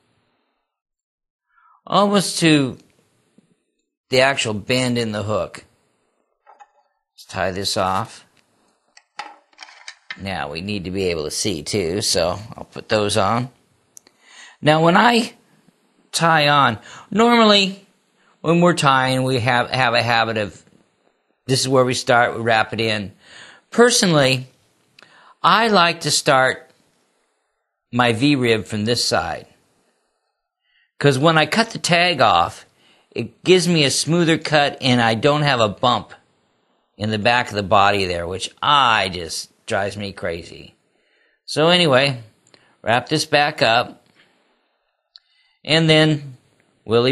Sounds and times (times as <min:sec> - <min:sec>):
Speech: 0:01.8 - 0:02.9, 0:04.1 - 0:05.7, 0:07.2 - 0:08.3, 0:10.2 - 0:13.6, 0:14.6 - 0:15.4, 0:16.1 - 0:20.7, 0:21.5 - 0:24.5, 0:25.4 - 0:26.7, 0:28.0 - 0:29.6, 0:31.0 - 0:36.2, 0:37.0 - 0:40.8, 0:41.5 - 0:44.0, 0:45.7 - 0:47.1.